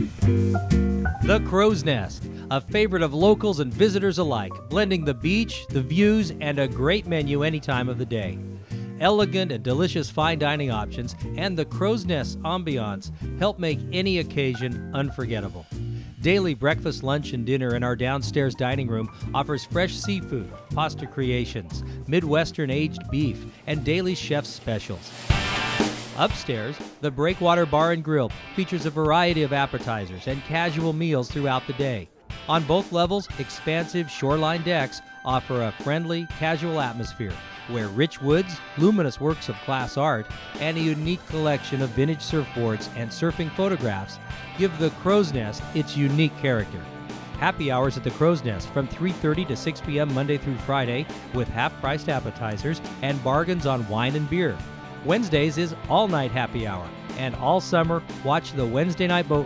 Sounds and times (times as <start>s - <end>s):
Music: 0.0s - 59.4s
Speech: 1.2s - 8.4s, 9.0s - 25.2s, 26.2s - 46.8s, 47.4s - 59.4s.